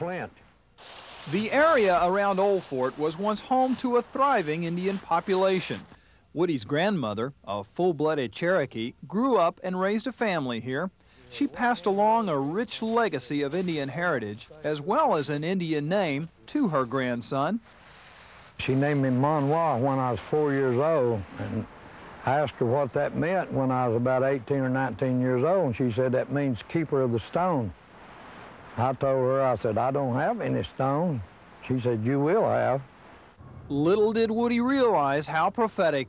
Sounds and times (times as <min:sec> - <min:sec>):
Speech: 0:00.0 - 0:00.4, 0:01.3 - 0:17.6, 0:18.6 - 0:27.8, 0:28.8 - 0:32.9, 0:33.7 - 0:36.0.